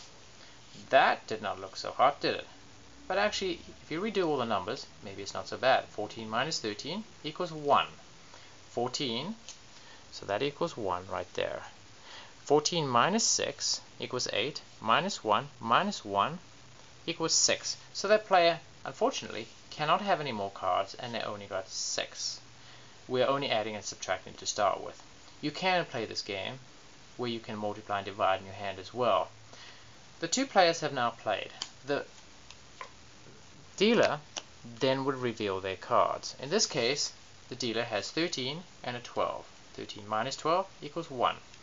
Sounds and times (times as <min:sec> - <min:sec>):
Inside, small room: 0:00.0 - 0:41.6
Speech: 0:00.8 - 0:08.0, 0:08.7 - 0:09.5, 0:10.1 - 0:11.8, 0:12.4 - 0:16.5, 0:17.1 - 0:22.4, 0:23.1 - 0:29.4, 0:30.2 - 0:32.1, 0:33.8 - 0:41.5.